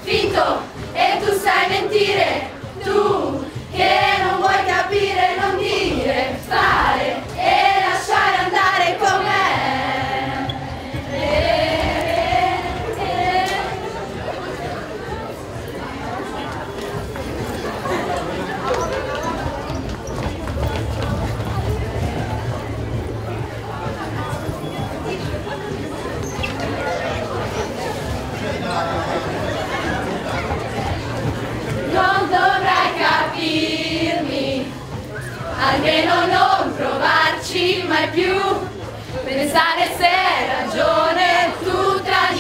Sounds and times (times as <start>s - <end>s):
Chatter: 0.0s - 42.4s
Speech: 0.0s - 42.4s.